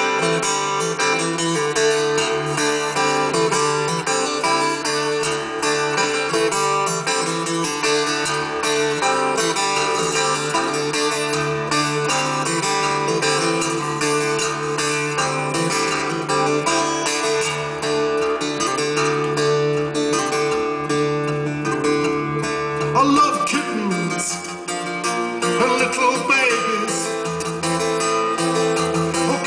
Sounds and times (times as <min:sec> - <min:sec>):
Music: 0:00.0 - 0:29.4.